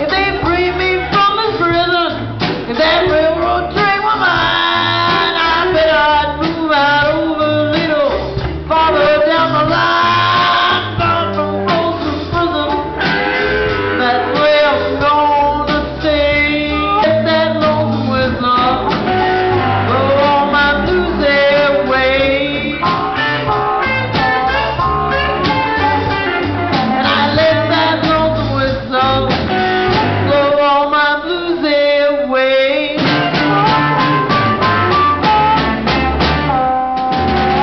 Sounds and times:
Music: 0.0s - 37.6s.

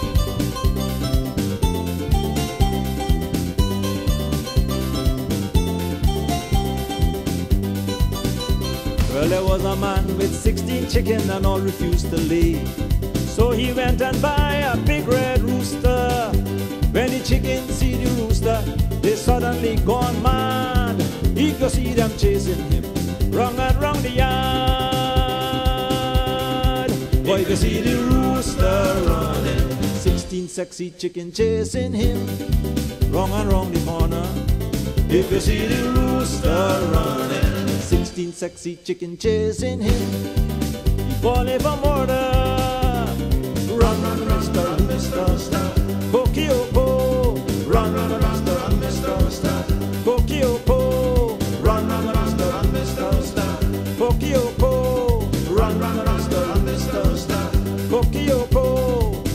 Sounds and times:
Music: 0.0s - 59.3s.

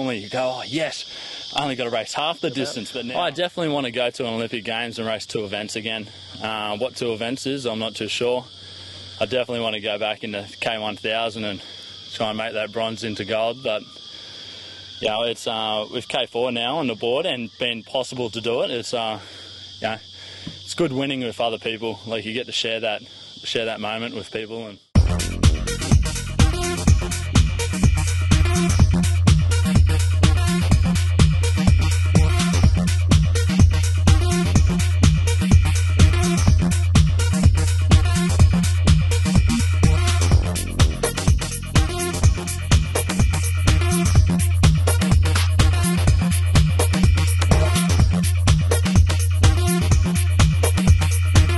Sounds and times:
Speech: 0.0s - 8.5s, 9.2s - 13.9s, 15.0s - 20.1s, 20.7s - 24.9s.

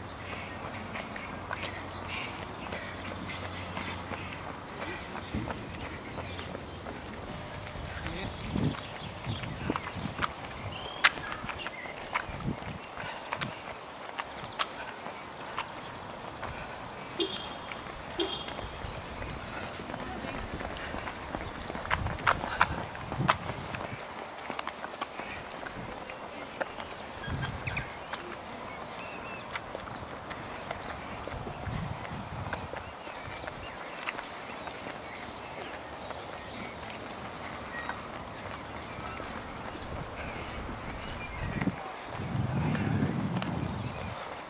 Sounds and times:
Walk, footsteps: 0.2s - 44.5s.

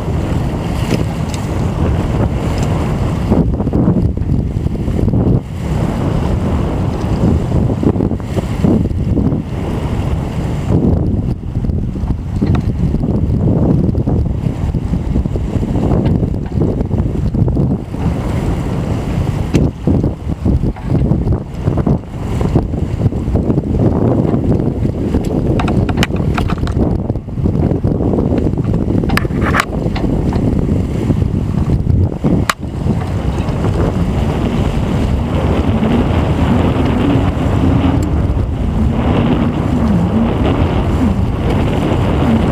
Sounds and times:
Sailboat, sailing ship: 0.0s - 42.5s
Waves, surf: 0.0s - 42.5s
Wind noise (microphone): 0.0s - 42.5s.

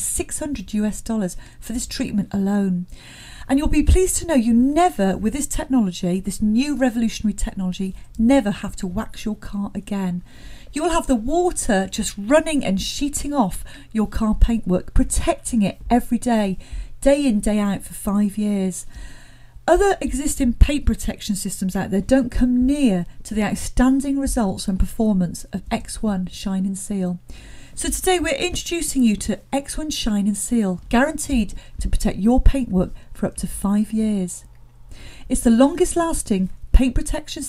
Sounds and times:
Speech: 0.0s - 2.9s, 3.5s - 18.9s, 19.7s - 27.2s, 27.8s - 34.5s, 35.3s - 37.4s.

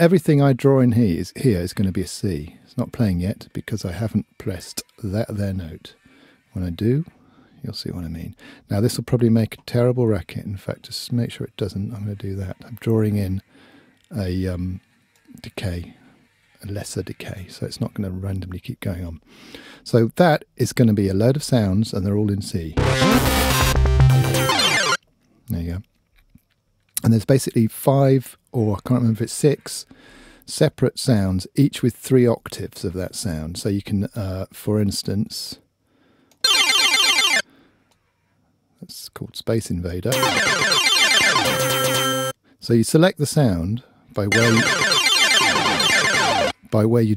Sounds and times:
Speech: 0.0s - 6.0s, 6.6s - 13.5s, 14.1s - 16.0s, 16.6s - 19.2s, 19.8s - 22.8s, 25.5s - 25.9s, 27.0s - 29.9s, 30.5s - 35.6s, 38.8s - 40.2s, 42.6s - 44.8s, 46.7s - 47.1s
Synthesizer: 22.8s - 25.0s, 40.2s - 42.4s, 44.3s - 46.5s.

